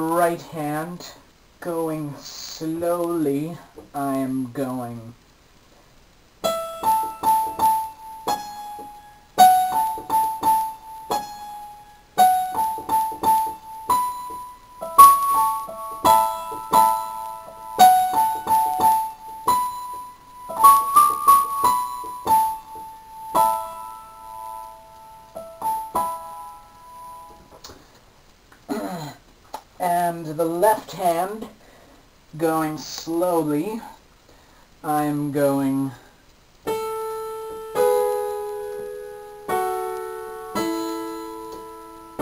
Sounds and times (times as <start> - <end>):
Electric piano: 6.4 - 27.6, 36.7 - 42.2.